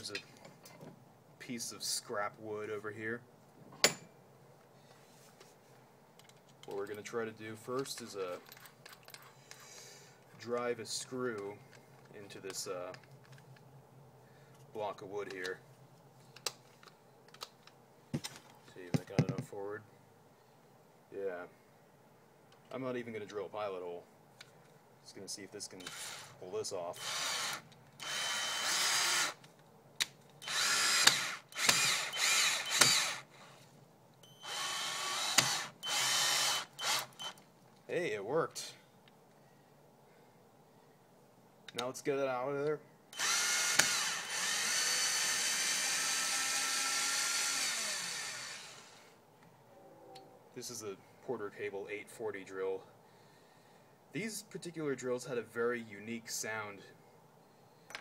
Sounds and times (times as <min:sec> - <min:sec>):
Speech: 0:00.0 - 0:00.3, 0:01.4 - 0:03.3, 0:06.7 - 0:08.4, 0:10.4 - 0:13.0, 0:14.7 - 0:15.6, 0:18.7 - 0:19.9, 0:21.1 - 0:21.6, 0:22.7 - 0:24.1, 0:25.0 - 0:27.0, 0:37.9 - 0:38.8, 0:41.7 - 0:42.8, 0:50.6 - 0:52.9, 0:54.2 - 0:57.0
Drill: 0:25.8 - 0:26.4, 0:27.0 - 0:29.4, 0:30.4 - 0:33.5, 0:34.4 - 0:37.4, 0:43.2 - 0:49.2.